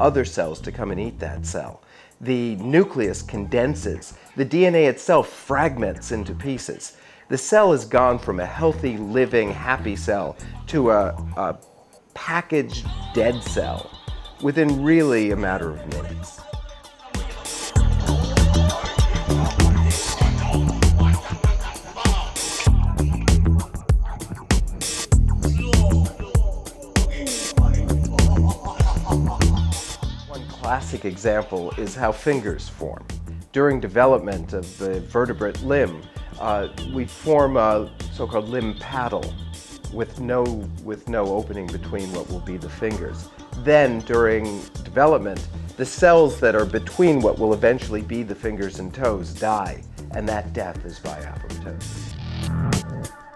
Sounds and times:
Speech: 0:00.0 - 0:11.6, 0:12.2 - 0:16.4, 0:30.4 - 0:51.9
Music: 0:00.0 - 0:53.3.

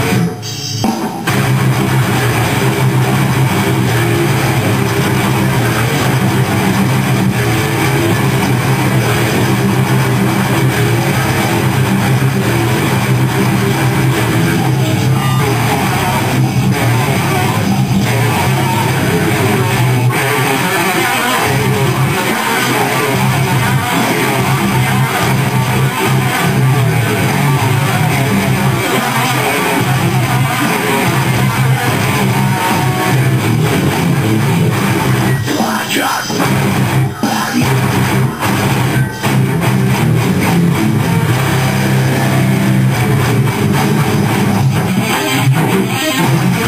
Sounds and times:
Music: 0:00.0 - 0:46.6.

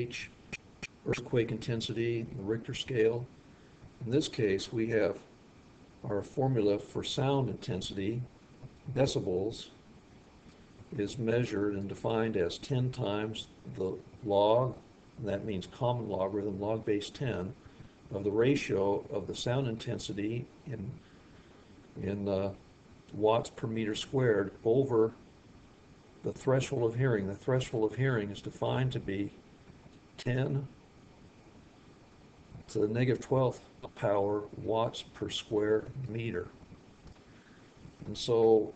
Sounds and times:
Speech: 0:00.0 - 0:00.4, 0:01.0 - 0:03.3, 0:04.0 - 0:05.3, 0:06.0 - 0:08.3, 0:08.9 - 0:09.8, 0:10.9 - 0:21.0, 0:22.0 - 0:25.2, 0:26.2 - 0:29.4, 0:30.2 - 0:30.8, 0:32.6 - 0:36.6, 0:38.0 - 0:38.7.

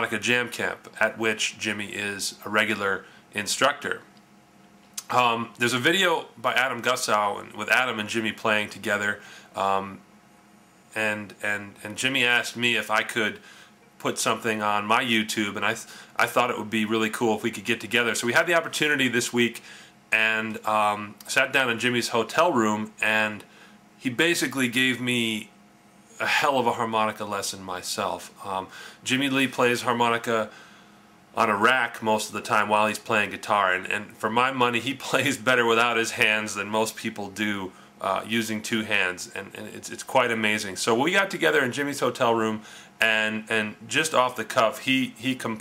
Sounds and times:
Speech: 0:00.0 - 0:04.1, 0:05.0 - 0:10.0, 0:10.9 - 0:13.4, 0:14.0 - 0:25.5, 0:26.2 - 0:30.5, 0:31.4 - 0:45.6.

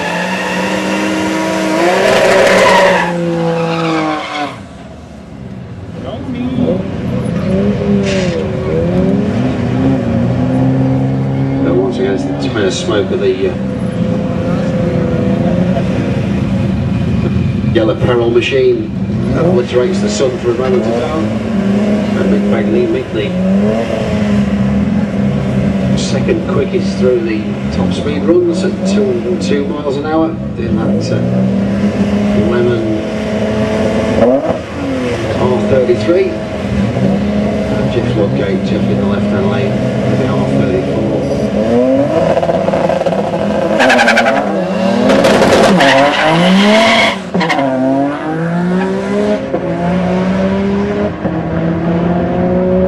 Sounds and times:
Speech: 0:11.6 - 0:13.6, 0:17.7 - 0:21.3, 0:22.2 - 0:23.4, 0:26.0 - 0:31.2, 0:32.4 - 0:32.9, 0:35.4 - 0:36.4, 0:37.7 - 0:41.2.

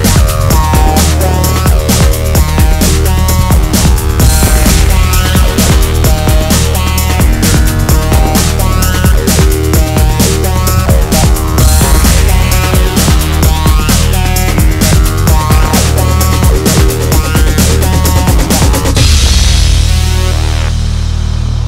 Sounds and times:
Music: 0:00.0 - 0:21.6.

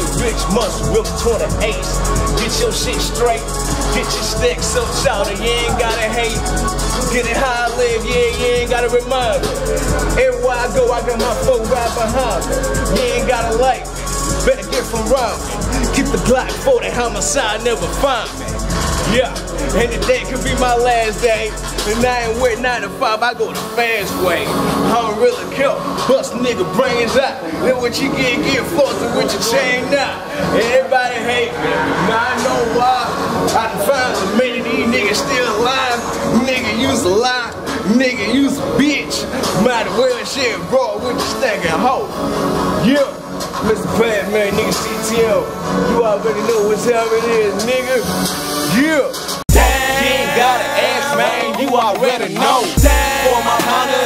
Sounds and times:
Music: 0:00.0 - 0:54.0.

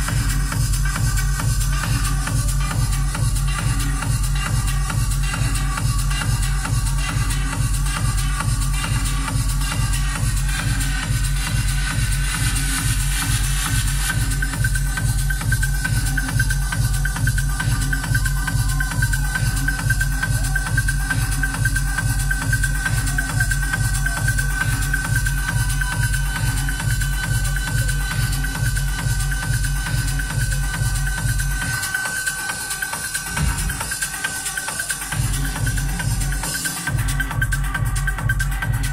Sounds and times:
Techno: 0:00.0 - 0:38.9.

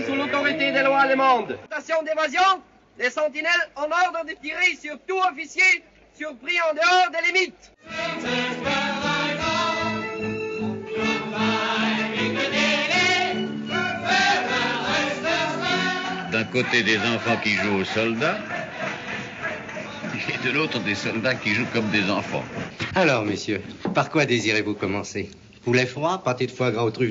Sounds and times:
Speech: 0:00.0 - 0:07.7, 0:16.4 - 0:18.4, 0:20.0 - 0:27.1
Music: 0:07.8 - 0:21.2.

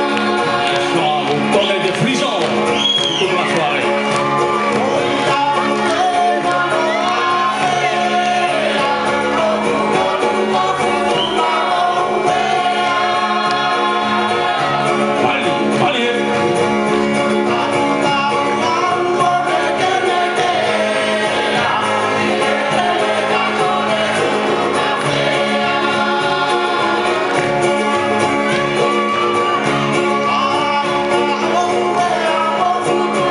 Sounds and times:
Music: 0:00.0 - 0:33.3
Speech: 0:01.0 - 0:02.5.

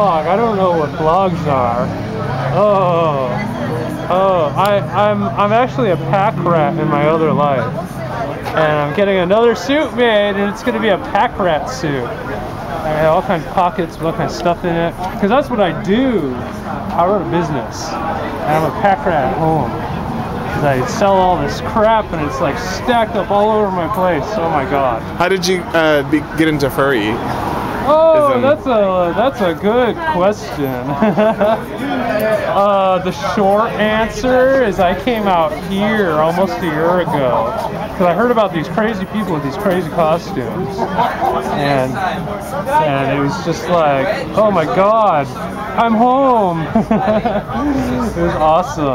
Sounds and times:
Speech: 0:00.0 - 0:19.8, 0:20.5 - 0:27.2, 0:31.8 - 0:48.9.

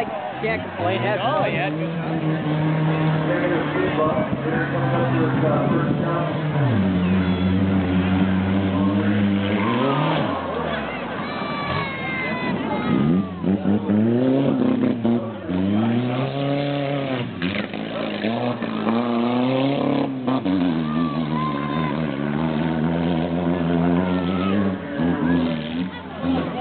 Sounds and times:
Car: 0:00.0 - 0:26.6.

